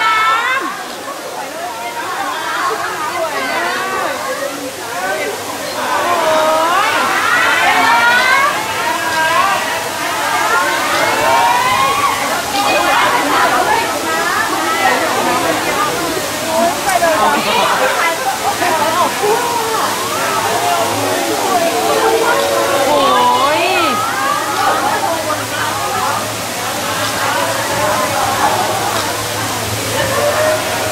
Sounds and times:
Speech: 0:00.0 - 0:30.9.

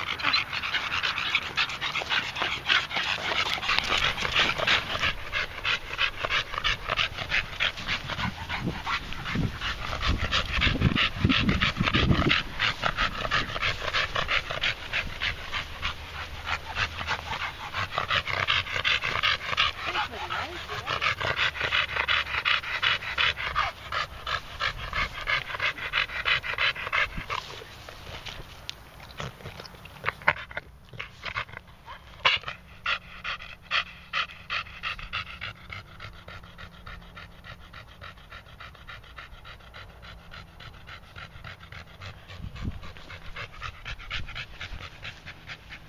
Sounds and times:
Canidae, dogs, wolves: 0:00.0 - 0:45.8
Dog: 0:00.0 - 0:45.8.

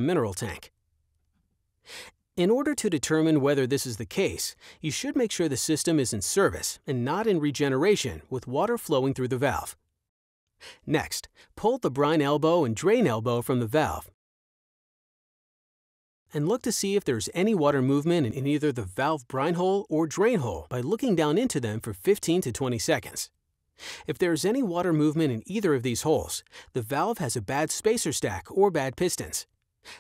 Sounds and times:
Speech: 0:00.0 - 0:00.7, 0:02.4 - 0:09.8, 0:10.8 - 0:14.2, 0:16.3 - 0:23.3, 0:24.0 - 0:29.5.

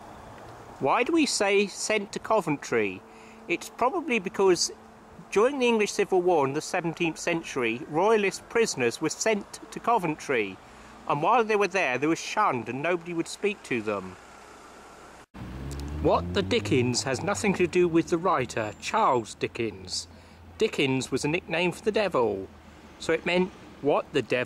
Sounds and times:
Outside, rural or natural: 0:00.0 - 0:24.4
Speech: 0:00.8 - 0:14.2, 0:16.0 - 0:24.4.

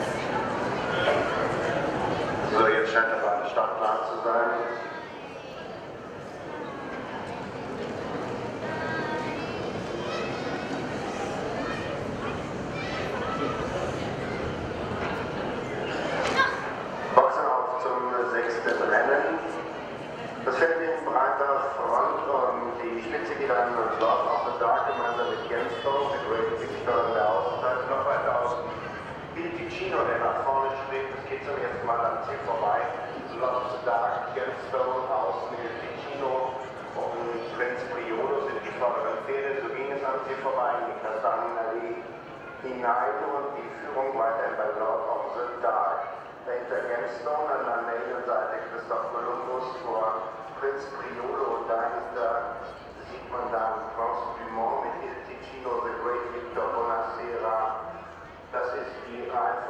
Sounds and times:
Speech: 0:00.0 - 0:05.8, 0:07.1 - 0:59.6.

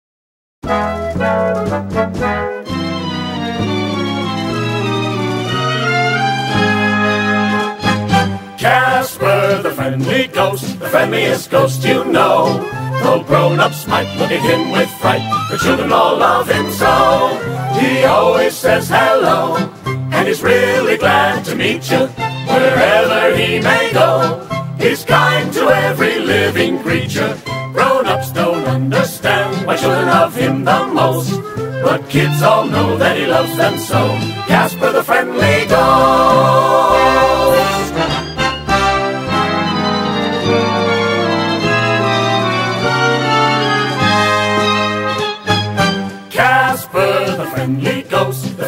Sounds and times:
Music: 0:00.6 - 0:48.6.

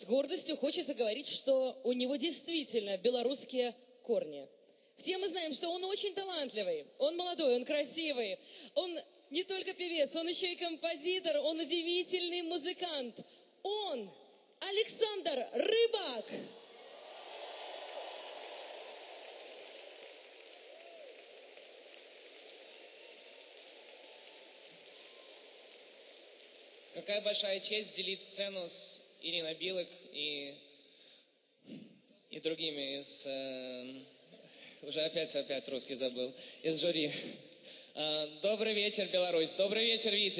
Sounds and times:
Speech: 0:00.0 - 0:16.5, 0:27.0 - 0:30.6, 0:32.3 - 0:34.1, 0:34.8 - 0:37.4, 0:38.0 - 0:40.3.

